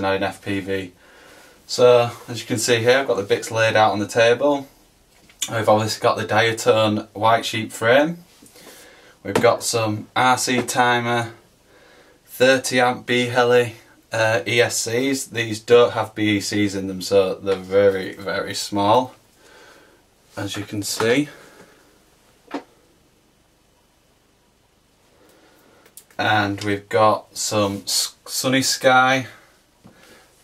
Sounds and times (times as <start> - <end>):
Speech: 0.0 - 1.0, 1.7 - 4.7, 5.4 - 8.3, 9.2 - 11.4, 12.3 - 19.2, 20.4 - 21.4, 26.2 - 29.4.